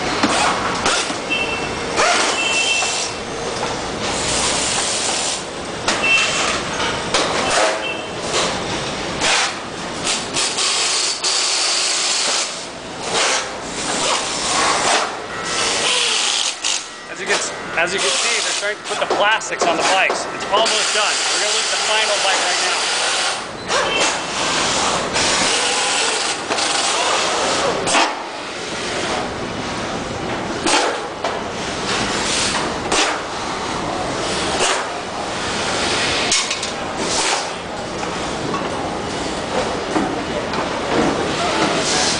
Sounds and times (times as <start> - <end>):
Inside, large room or hall: 0.0 - 42.1
Speech: 17.1 - 22.9.